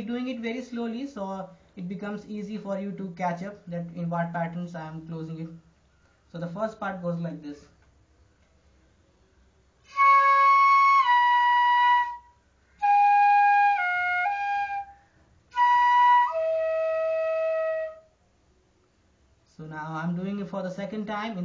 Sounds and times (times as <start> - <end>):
Speech: 0.0 - 5.6, 6.3 - 7.8, 19.5 - 21.4
Flute: 9.8 - 18.2.